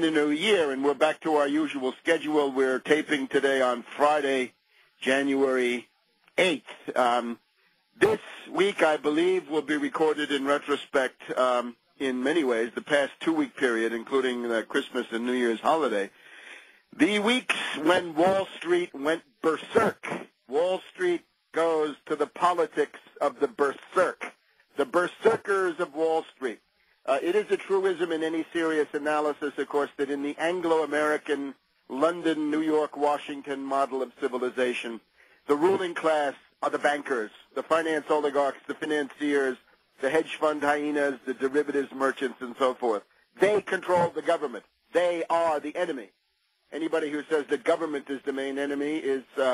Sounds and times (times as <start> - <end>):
Radio: 0.0 - 7.4, 8.0 - 46.1, 46.8 - 49.5
Speech: 0.0 - 7.4, 8.0 - 16.2, 17.0 - 49.5.